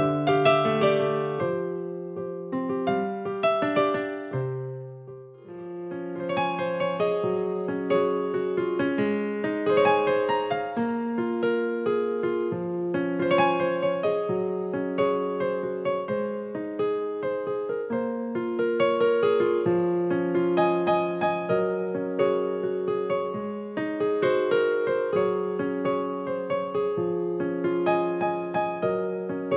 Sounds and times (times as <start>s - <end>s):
Piano: 0.0s - 29.5s.